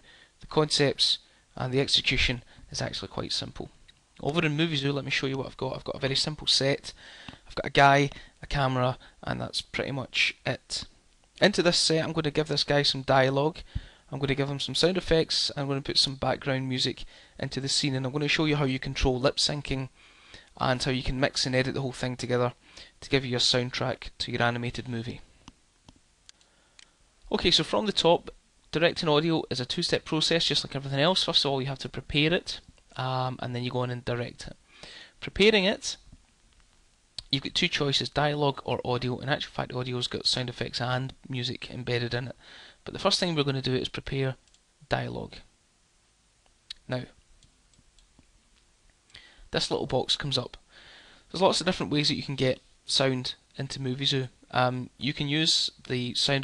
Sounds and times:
Speech: 0.4s - 19.9s, 20.6s - 25.3s, 27.3s - 34.6s, 35.2s - 36.1s, 37.2s - 45.5s, 46.7s - 47.2s, 49.5s - 50.6s, 51.3s - 56.4s.

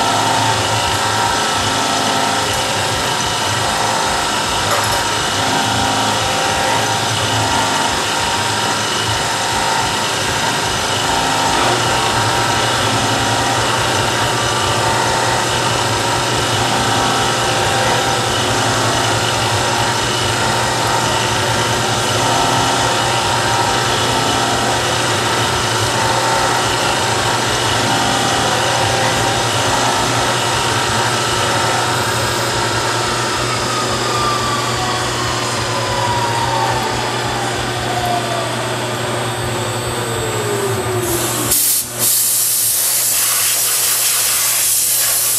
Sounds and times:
Ratchet, pawl: 0.0s - 36.0s, 40.4s - 45.3s.

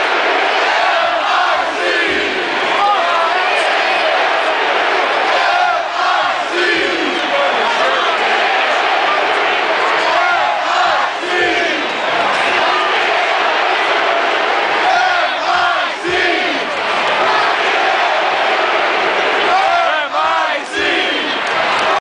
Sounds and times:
Speech: 6.5s - 11.4s, 19.5s - 21.4s.

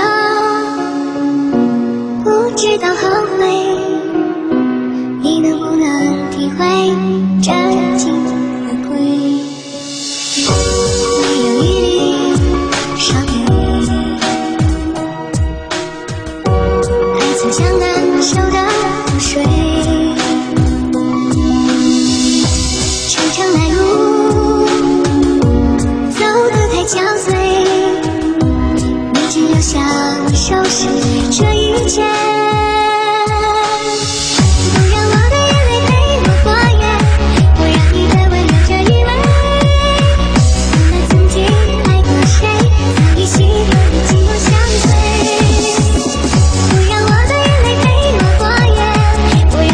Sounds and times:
Music: 0.0s - 49.7s.

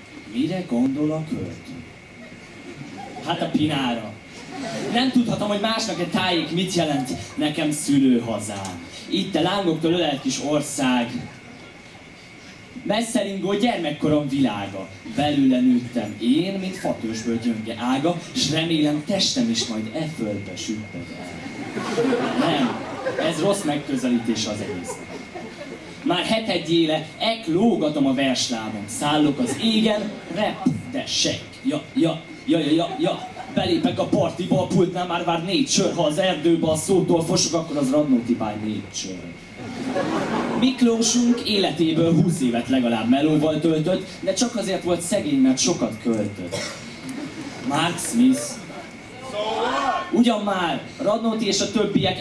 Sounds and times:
Speech: 0.3s - 1.8s, 3.2s - 4.2s, 4.9s - 11.4s, 12.8s - 21.2s, 22.3s - 25.0s, 26.0s - 39.4s, 40.6s - 46.6s, 47.7s - 52.2s.

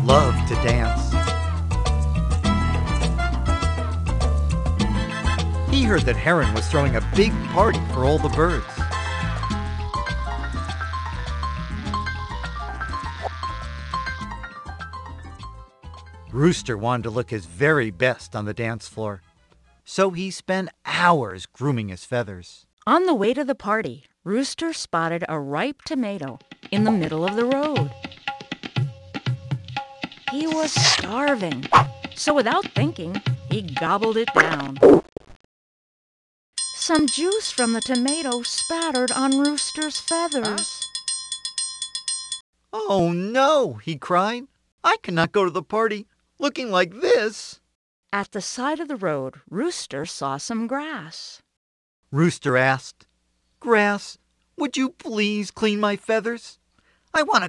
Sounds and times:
Speech: 0.0s - 1.1s, 5.7s - 8.8s, 16.3s - 19.2s, 19.9s - 27.9s, 30.3s - 34.8s, 36.9s - 40.7s, 42.8s - 47.6s, 48.2s - 51.4s, 52.1s - 56.6s, 57.2s - 57.4s
Music: 0.0s - 19.9s, 26.1s - 34.8s, 36.6s - 42.2s.

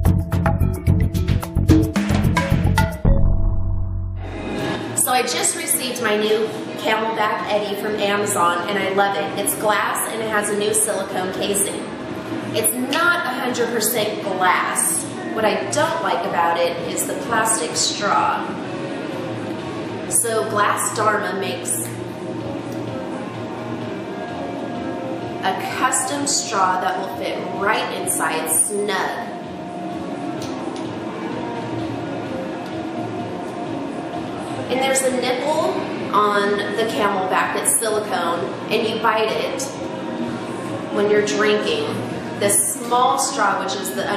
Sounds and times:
Music: 0.0s - 44.1s
Speech: 5.0s - 11.9s, 12.6s - 18.6s, 20.1s - 22.0s, 25.4s - 29.3s, 34.7s - 39.7s, 41.0s - 44.1s.

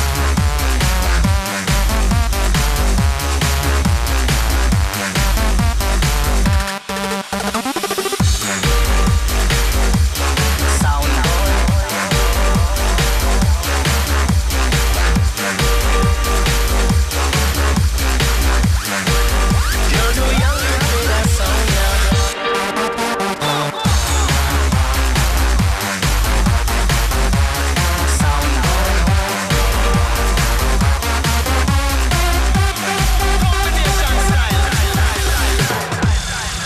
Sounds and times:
Electronic dance music: 0.0s - 36.6s.

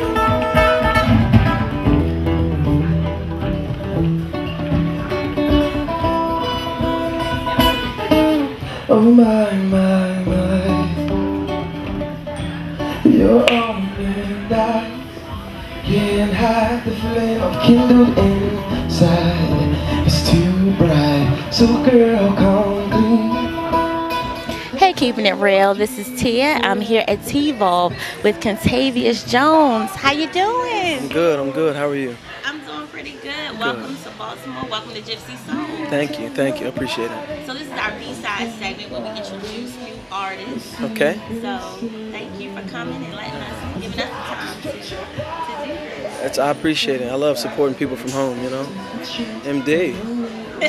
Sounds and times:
Guitar: 0.0s - 50.6s.

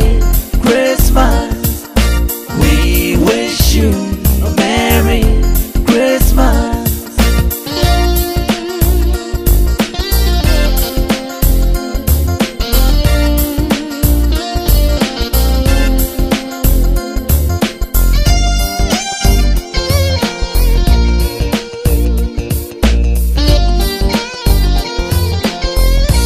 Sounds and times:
Rhythm and blues: 0.0s - 26.2s.

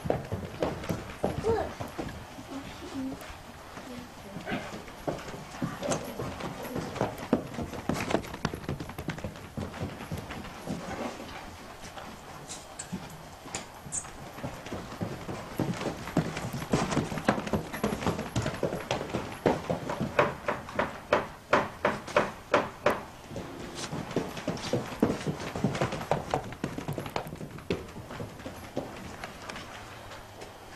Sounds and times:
Horse: 0.0s - 30.7s.

